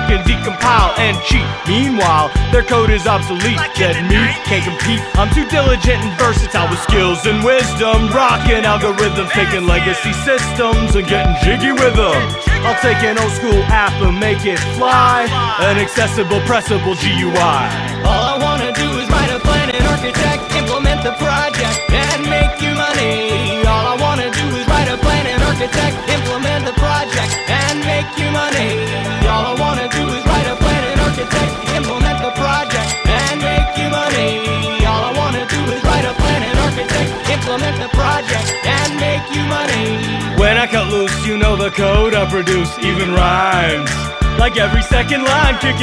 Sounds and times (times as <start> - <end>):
Hip hop music: 0.0 - 45.8.